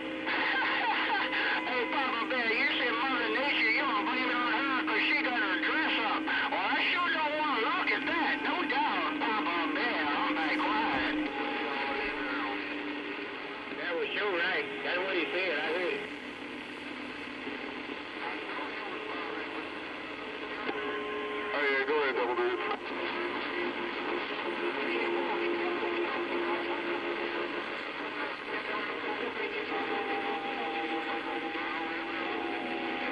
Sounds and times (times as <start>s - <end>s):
Radio: 0.0s - 33.1s
Speech: 0.6s - 11.2s, 13.8s - 16.0s, 21.5s - 22.7s.